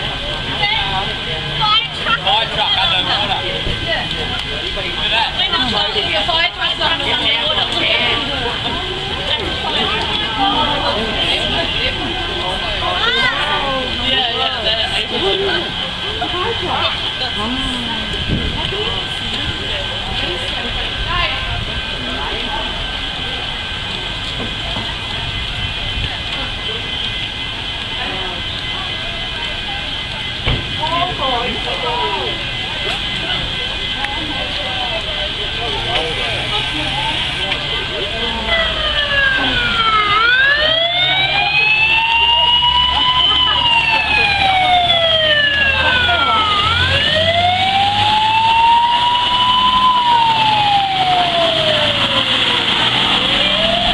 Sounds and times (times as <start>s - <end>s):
Speech: 0.0s - 27.1s, 28.0s - 39.8s
Vehicle: 0.0s - 53.9s.